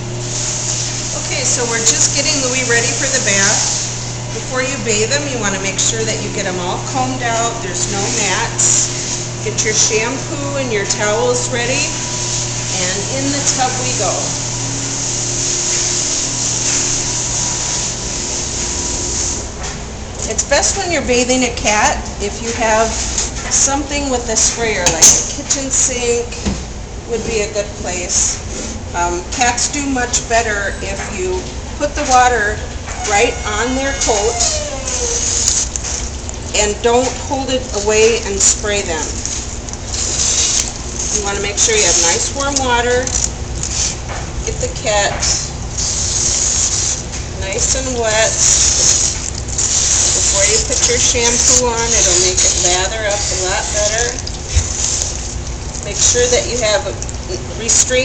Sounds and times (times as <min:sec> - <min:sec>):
Speech: 0:01.2 - 0:03.7, 0:04.4 - 0:12.0, 0:12.8 - 0:14.4, 0:20.2 - 0:26.4, 0:27.1 - 0:28.4, 0:29.0 - 0:35.2, 0:36.6 - 0:39.2, 0:41.1 - 0:43.1, 0:44.5 - 0:45.2, 0:47.4 - 0:48.4, 0:50.3 - 0:54.2, 0:55.8 - 0:58.0.